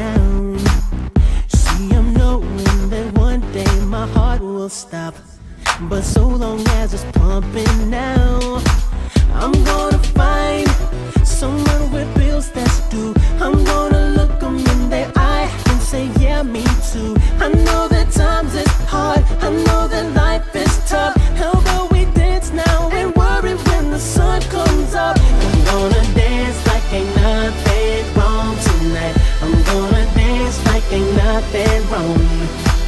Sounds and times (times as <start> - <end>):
Music: 0.0 - 32.8.